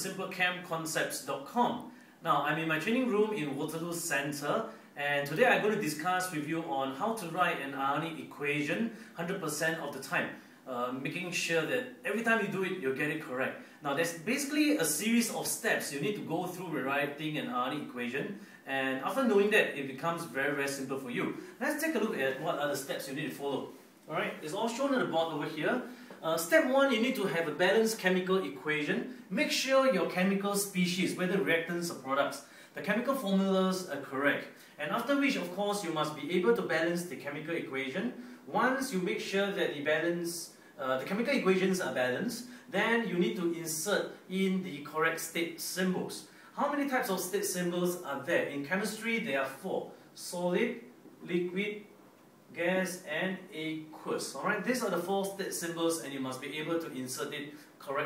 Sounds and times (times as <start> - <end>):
Speech: 0.0 - 51.9, 52.5 - 58.0.